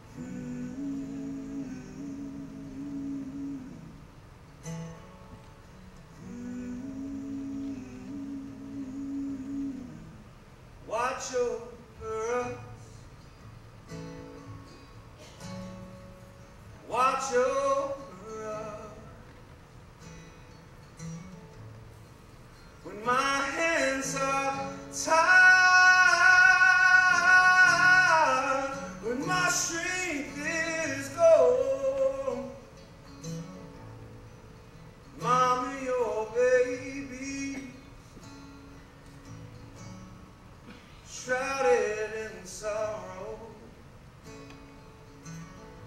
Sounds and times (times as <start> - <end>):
Music: 12.4 - 40.4, 44.2 - 45.8.